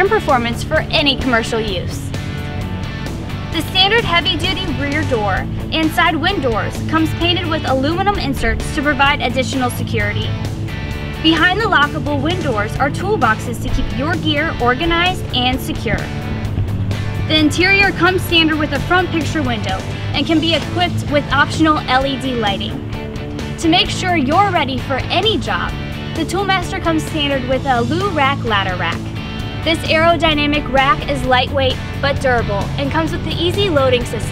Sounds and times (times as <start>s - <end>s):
Speech: 0.0s - 2.1s, 3.6s - 10.4s, 11.2s - 16.1s, 17.3s - 22.8s, 23.6s - 29.1s, 29.7s - 34.3s
Music: 0.0s - 34.3s.